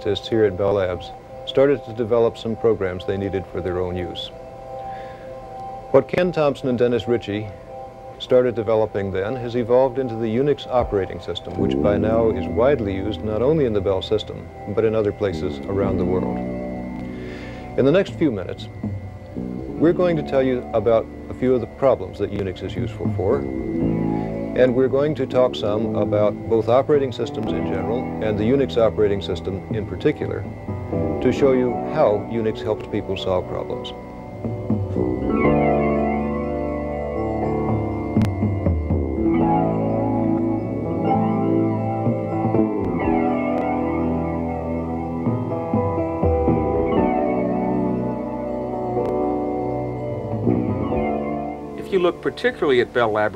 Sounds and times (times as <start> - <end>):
Speech: 0.0 - 4.4, 6.0 - 7.6, 8.2 - 16.4, 17.8 - 18.7, 19.8 - 23.5, 24.6 - 30.5, 31.2 - 34.0, 51.8 - 53.3
Music: 0.0 - 53.3.